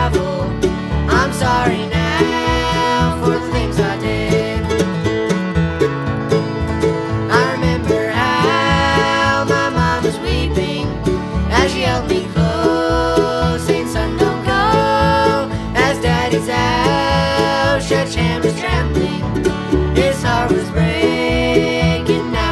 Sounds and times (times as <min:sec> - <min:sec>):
Music: 0:00.0 - 0:22.5.